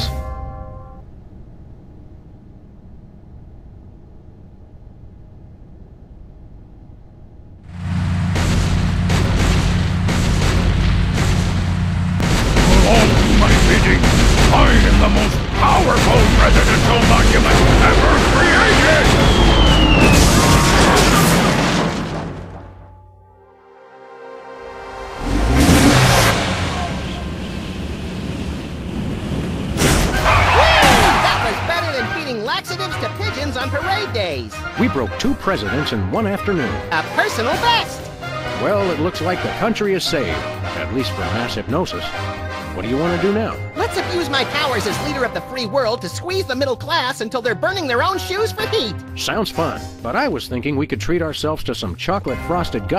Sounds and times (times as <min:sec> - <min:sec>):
Speech synthesizer: 0:14.6 - 0:19.0, 0:31.1 - 0:38.0, 0:42.8 - 0:52.9.